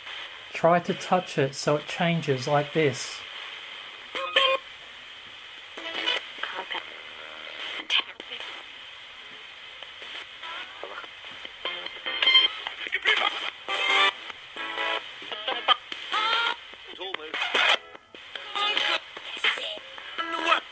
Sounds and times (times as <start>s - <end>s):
Inside, small room: 0.0s - 20.7s
Music: 10.1s - 20.7s.